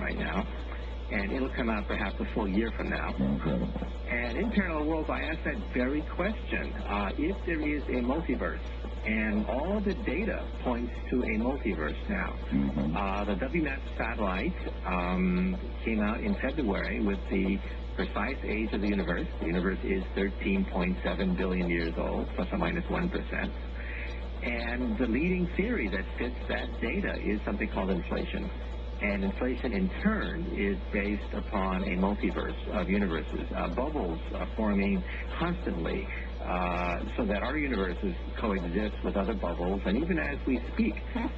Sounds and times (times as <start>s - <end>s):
Speech: 0.0s - 41.3s.